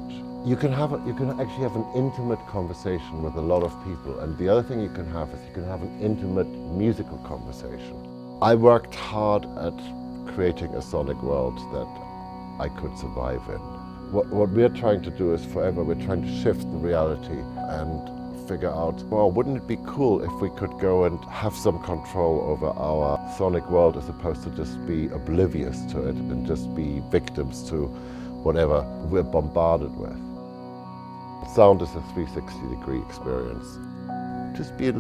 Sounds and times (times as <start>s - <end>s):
Speech: 0.0s - 12.0s, 12.6s - 30.2s, 31.4s - 33.8s, 34.6s - 35.0s
Music: 0.0s - 35.0s.